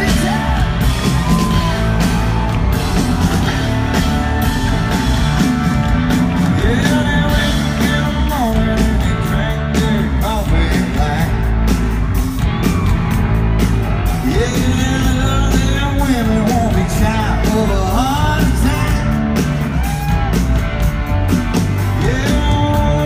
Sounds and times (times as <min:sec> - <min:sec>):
Country: 0:00.0 - 0:23.0.